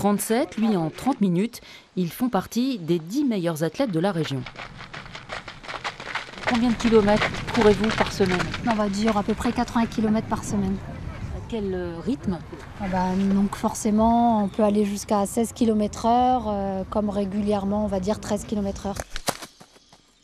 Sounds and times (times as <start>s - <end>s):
Speech: 0.0s - 4.5s, 6.5s - 19.0s
Outside, rural or natural: 0.0s - 20.2s
Run: 3.9s - 11.3s, 19.0s - 20.1s.